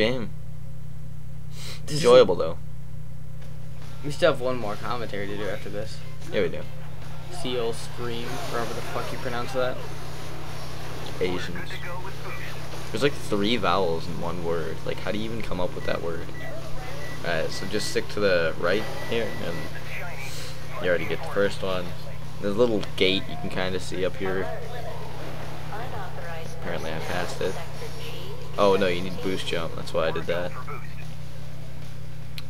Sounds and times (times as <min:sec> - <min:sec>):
Speech: 0:01.9 - 0:02.6, 0:07.4 - 0:09.8, 0:11.2 - 0:16.3, 0:17.3 - 0:25.0.